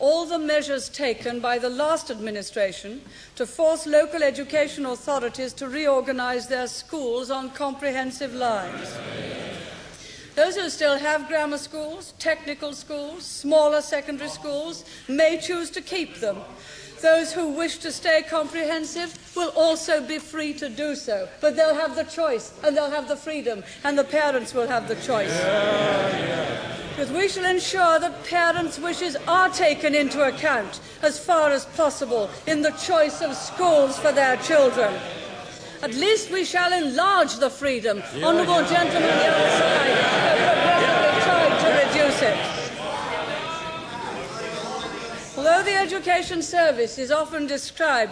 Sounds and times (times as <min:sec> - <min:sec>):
Female speech, woman speaking: 0:00.0 - 0:08.8, 0:10.4 - 0:25.4, 0:27.0 - 0:35.0, 0:35.8 - 0:42.6, 0:45.4 - 0:48.1
Narration, monologue: 0:00.0 - 0:48.1.